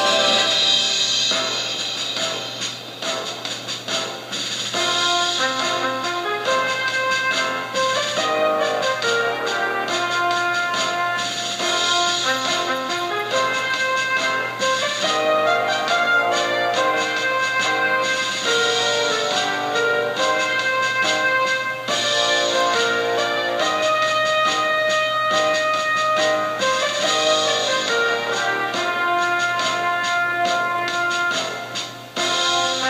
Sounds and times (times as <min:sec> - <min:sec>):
Music: 0:00.0 - 0:32.8.